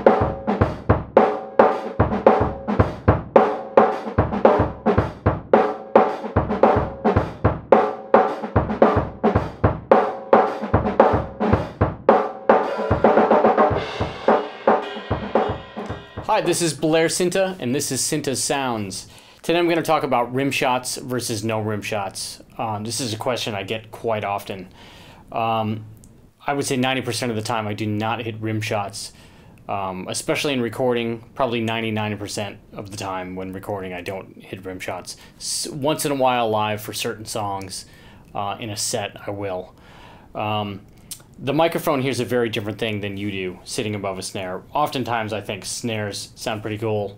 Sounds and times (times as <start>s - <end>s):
Speech: 16.3s - 24.7s, 25.3s - 39.7s, 40.4s - 40.8s, 41.4s - 47.1s.